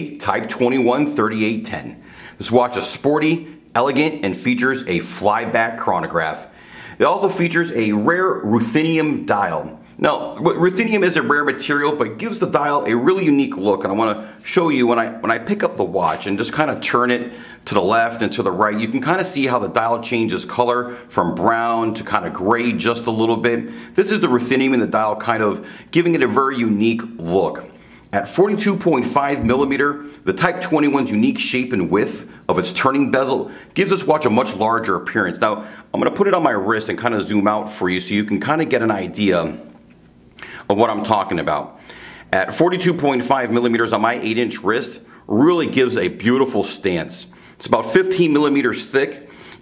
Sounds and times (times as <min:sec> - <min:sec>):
Speech: 0:00.0 - 0:39.8, 0:40.6 - 0:49.3.